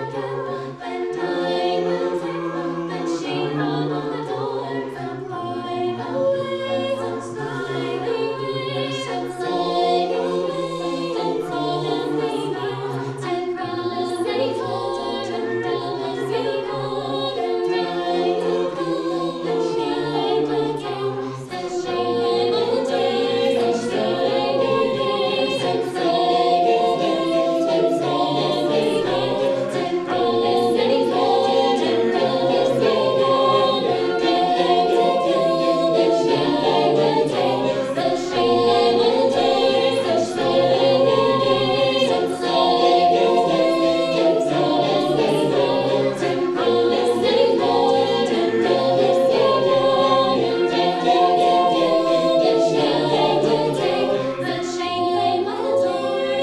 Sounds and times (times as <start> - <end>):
A capella: 0.0 - 56.4
Singing: 0.0 - 56.4.